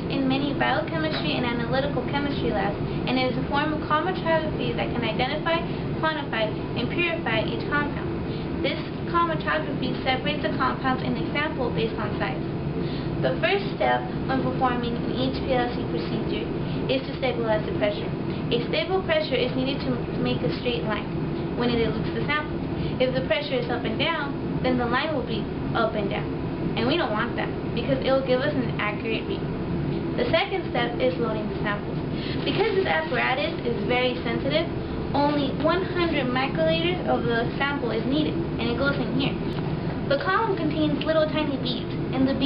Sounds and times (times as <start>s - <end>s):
Speech: 0.0s - 12.4s, 13.2s - 29.5s, 30.2s - 39.5s, 40.1s - 42.4s.